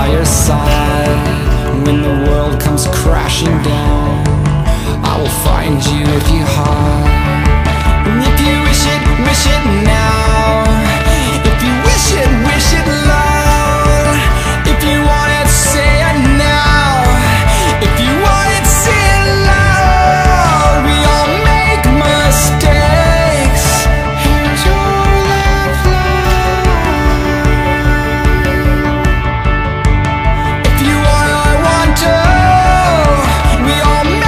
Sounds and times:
Independent music: 0.0 - 34.2.

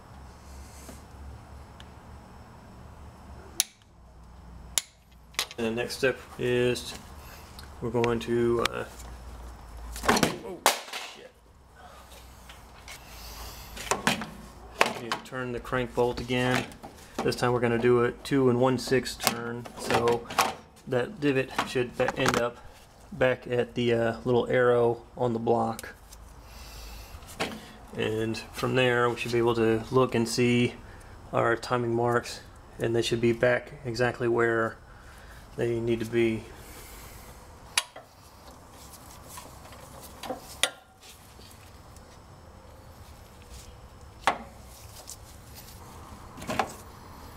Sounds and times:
Speech: 5.6 - 7.0, 7.8 - 9.0, 14.8 - 20.3, 20.9 - 22.6, 23.2 - 26.0, 27.9 - 34.8, 35.6 - 36.5.

